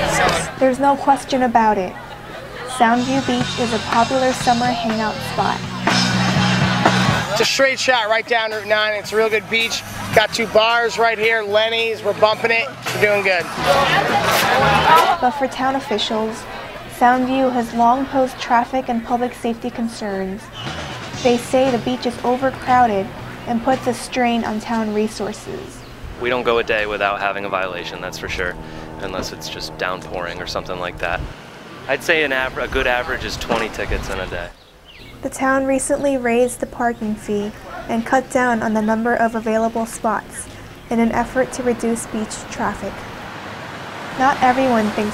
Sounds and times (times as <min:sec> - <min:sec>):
Speech: 0:02.8 - 0:05.7, 0:21.2 - 0:31.2, 0:31.9 - 0:34.5, 0:35.3 - 0:43.0, 0:44.2 - 0:45.1.